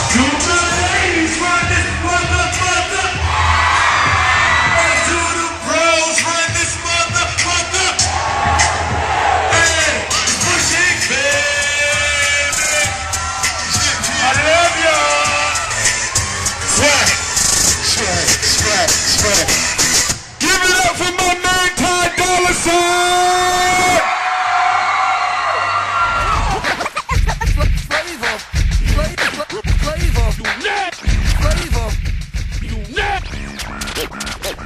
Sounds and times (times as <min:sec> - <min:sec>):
Music: 0:00.0 - 0:24.0, 0:25.6 - 0:34.6
Inside, large room or hall: 0:00.0 - 0:31.2
Speech: 0:20.4 - 0:24.0.